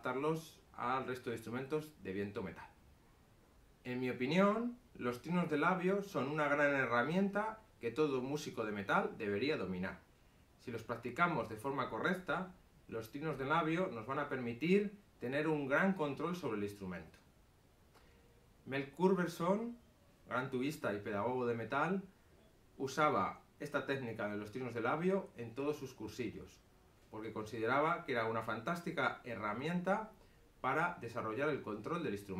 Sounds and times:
Speech: 0.0 - 2.8, 3.8 - 10.0, 10.6 - 17.2, 18.7 - 22.1, 22.8 - 32.3.

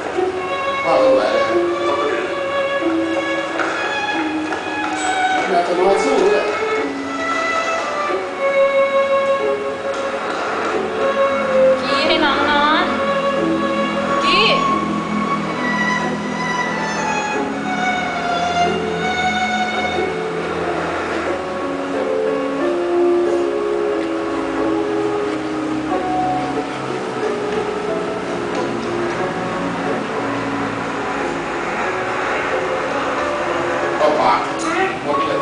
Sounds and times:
Music: 0.0 - 35.4.

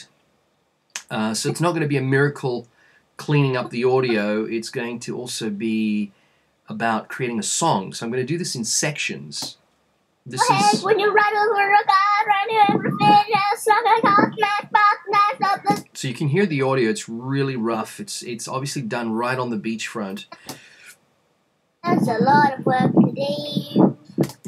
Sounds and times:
Speech: 1.0 - 6.1, 6.7 - 9.6, 10.3 - 11.3, 12.6 - 20.4, 21.8 - 24.0.

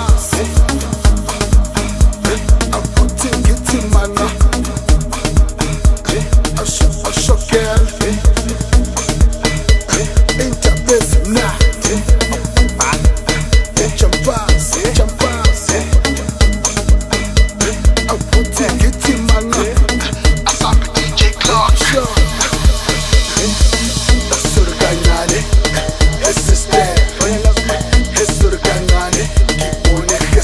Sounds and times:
Music: 0.0 - 30.4.

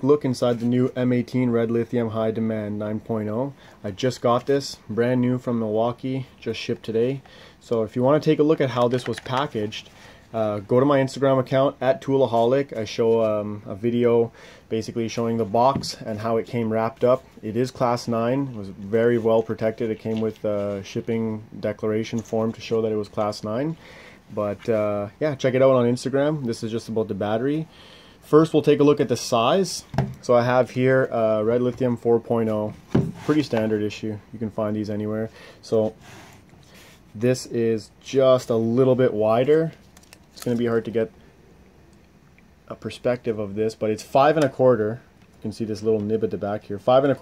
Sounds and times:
Speech: 0.0 - 36.0, 37.1 - 39.8, 40.4 - 41.1, 42.6 - 47.2.

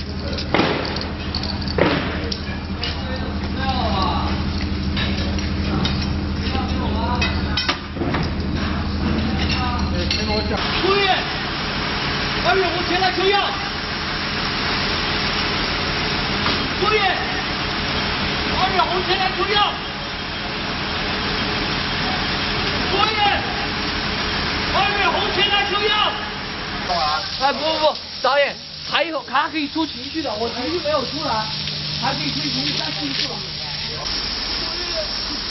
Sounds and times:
Speech: 2.2 - 4.4, 5.7 - 7.8, 12.4 - 13.7, 18.5 - 19.8, 26.9 - 35.2.

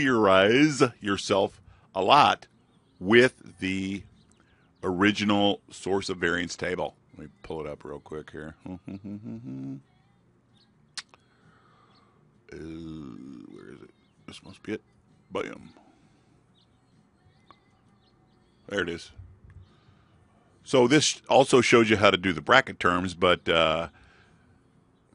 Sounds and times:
Speech: 0.0 - 4.1, 4.8 - 9.8, 12.5 - 15.8, 18.7 - 19.2, 20.7 - 23.9.

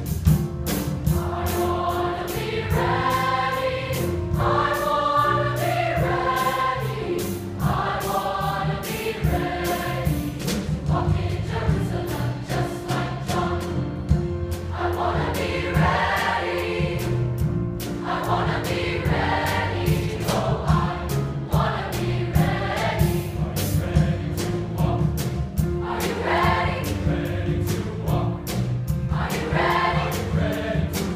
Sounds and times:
Music: 0.0 - 31.1.

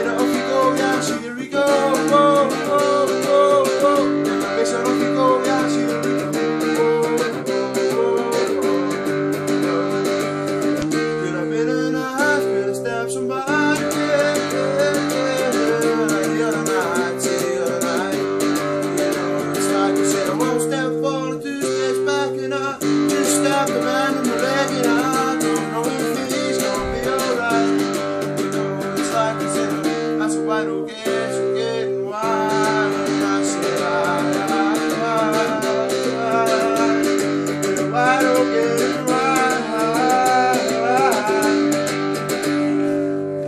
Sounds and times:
Steel guitar, slide guitar: 0.0 - 43.4.

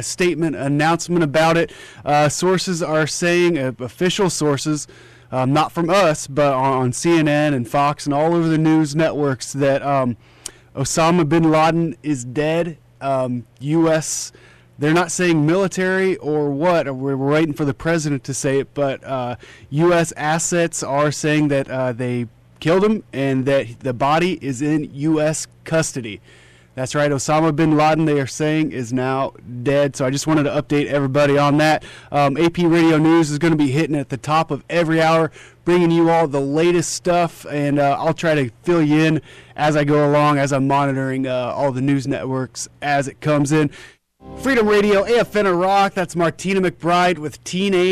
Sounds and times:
Speech: 0.0 - 10.2, 10.8 - 26.2, 26.8 - 43.8, 44.4 - 47.9.

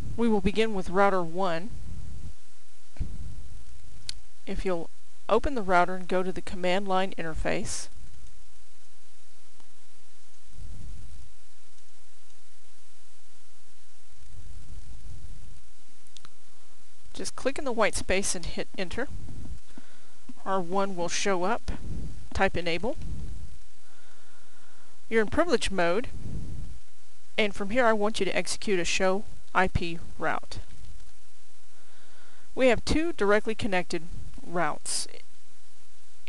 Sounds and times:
Speech: 0.2 - 1.7, 4.5 - 7.9, 17.2 - 19.1, 20.4 - 23.0, 25.1 - 26.1, 27.4 - 30.7, 32.6 - 35.2.

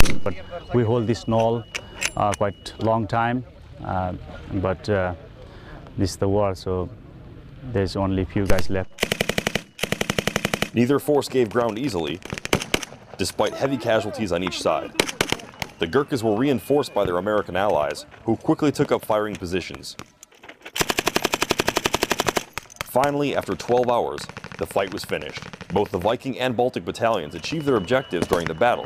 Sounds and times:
Outside, rural or natural: 0.0 - 28.8
Speech: 0.2 - 1.6, 6.0 - 6.9, 10.8 - 12.2, 13.2 - 15.0, 15.8 - 20.0, 22.9 - 28.8.

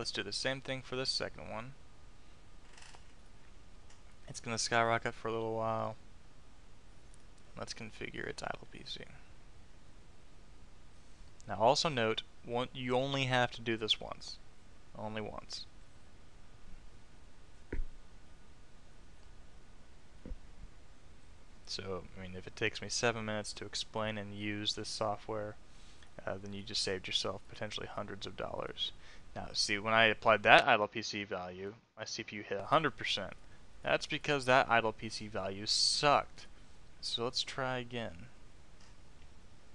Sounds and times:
Speech: 0.0 - 1.8, 4.3 - 6.0, 7.6 - 9.3, 11.5 - 14.4, 15.0 - 15.7, 21.7 - 25.6, 26.2 - 38.4.

